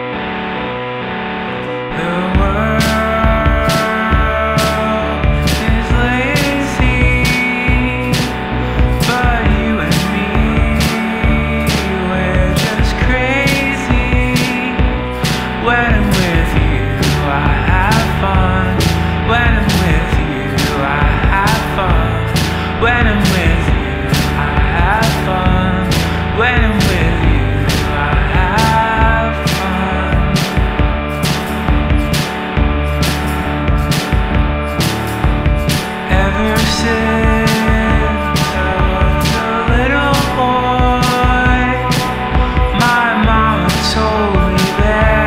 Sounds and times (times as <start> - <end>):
Music: 0.0 - 45.2.